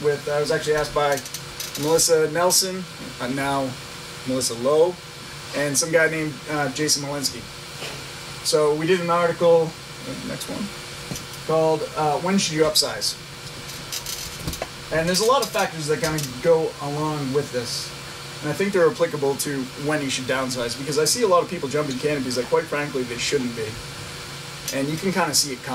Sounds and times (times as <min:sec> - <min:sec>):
Speech: 0:00.0 - 0:01.2, 0:01.8 - 0:05.0, 0:05.6 - 0:07.5, 0:08.5 - 0:10.7, 0:11.5 - 0:13.2, 0:14.9 - 0:23.8, 0:24.7 - 0:25.7.